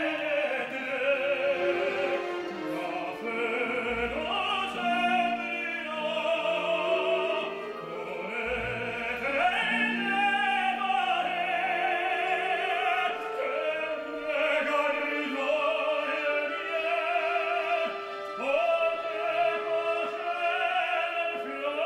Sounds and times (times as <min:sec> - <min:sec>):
Male singing: 0:00.0 - 0:21.8
Music: 0:00.0 - 0:21.8.